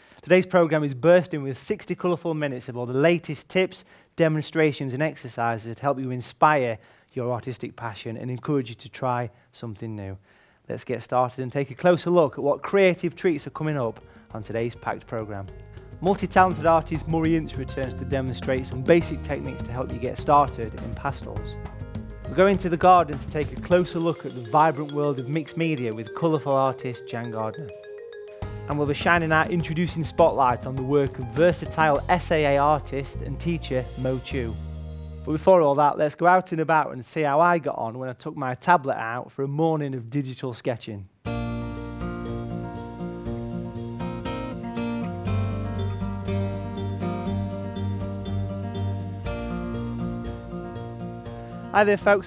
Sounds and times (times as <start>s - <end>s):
Speech: 0.2s - 21.5s, 22.3s - 27.7s, 28.7s - 34.6s, 35.3s - 41.1s, 51.7s - 52.2s
Music: 12.6s - 36.1s, 41.3s - 52.2s.